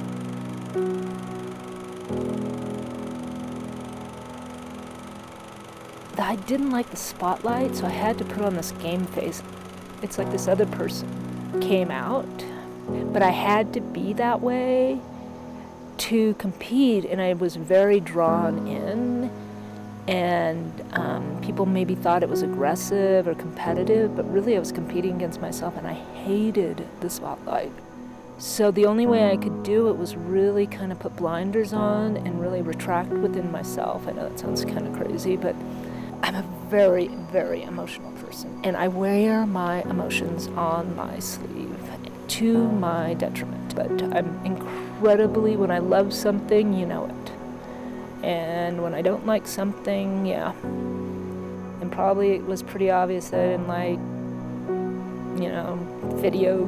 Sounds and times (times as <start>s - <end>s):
Music: 0.0s - 56.6s
Speech: 6.2s - 9.4s, 10.0s - 11.0s, 11.6s - 15.0s, 16.0s - 19.3s, 20.1s - 27.8s, 28.4s - 35.6s, 36.2s - 47.4s, 48.2s - 50.6s, 51.8s - 54.0s, 55.4s - 56.6s.